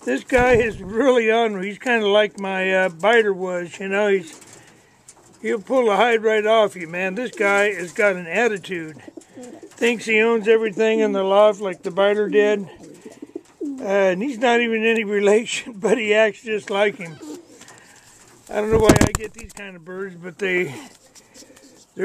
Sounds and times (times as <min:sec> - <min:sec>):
Speech: 0:00.0 - 0:04.3, 0:05.4 - 0:09.0, 0:09.8 - 0:12.7, 0:13.8 - 0:17.2, 0:18.5 - 0:20.9.